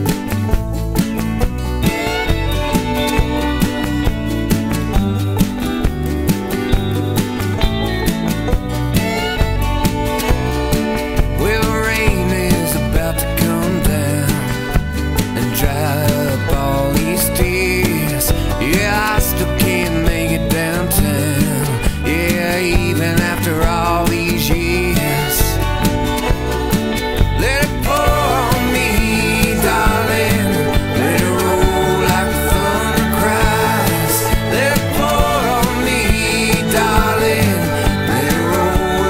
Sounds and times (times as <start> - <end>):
Music: 0.0 - 39.1.